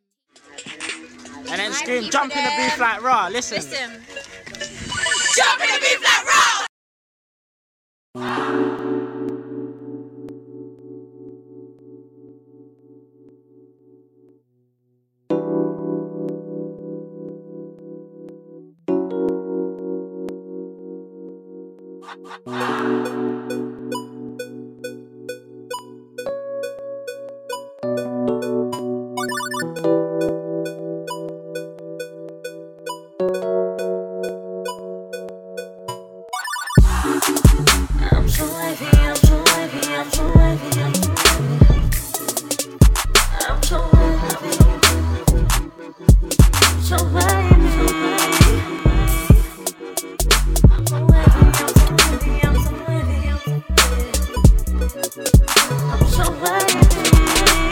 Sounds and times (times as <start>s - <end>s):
Hip hop music: 21.8s - 26.0s, 36.7s - 57.7s.